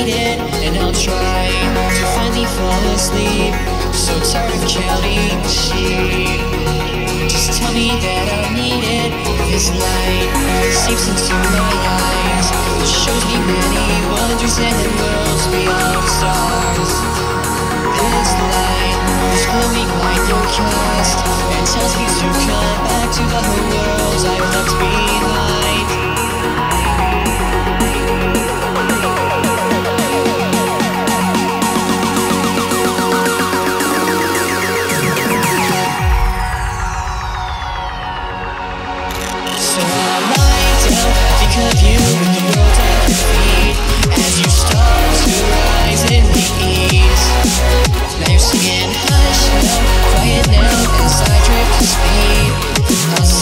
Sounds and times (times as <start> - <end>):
Music: 0.0 - 53.4.